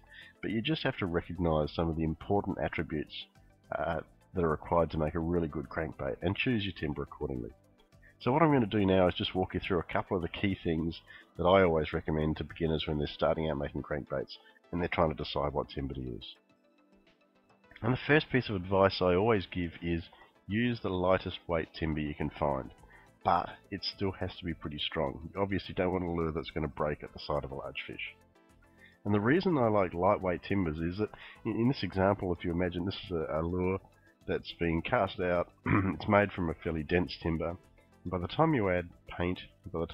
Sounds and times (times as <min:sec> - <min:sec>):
Speech: 0:00.4 - 0:07.5, 0:08.2 - 0:16.4, 0:17.8 - 0:28.2, 0:29.0 - 0:39.9.